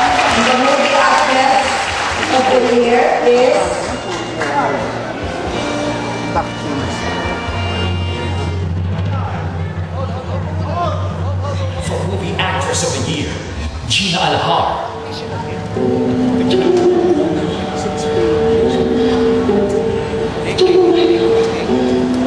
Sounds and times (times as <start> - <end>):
Inside, large room or hall: 0.0 - 22.2
Music: 0.0 - 22.2.